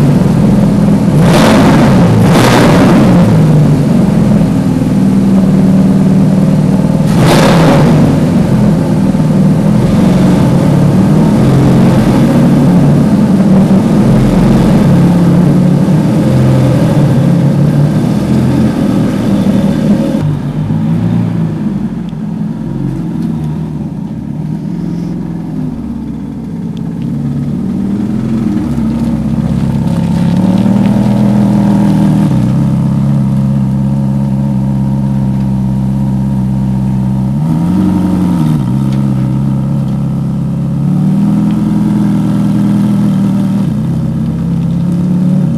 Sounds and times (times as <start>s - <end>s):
Car: 0.0s - 45.5s.